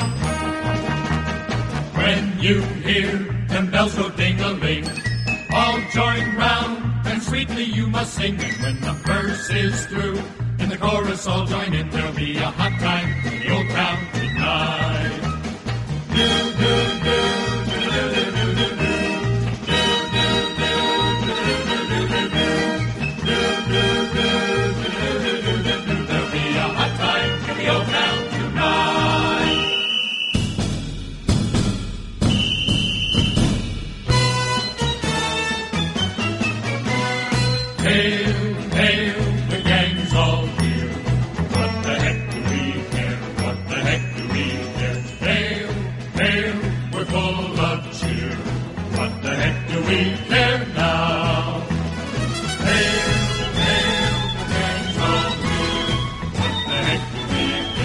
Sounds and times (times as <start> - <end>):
Music: 0.0 - 57.8
Male singing: 2.0 - 4.9, 5.5 - 15.2, 37.8 - 41.0, 41.6 - 51.7.